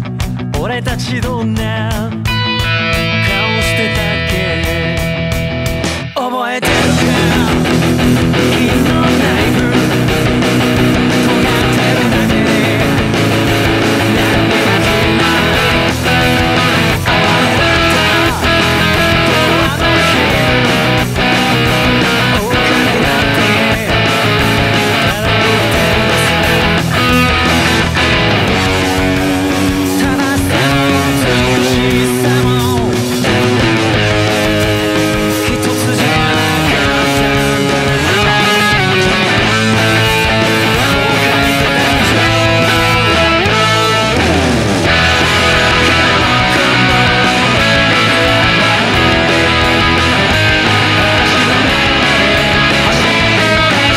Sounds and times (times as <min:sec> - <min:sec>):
Electric guitar: 0:00.0 - 0:53.9
Strum: 0:02.2 - 0:53.9.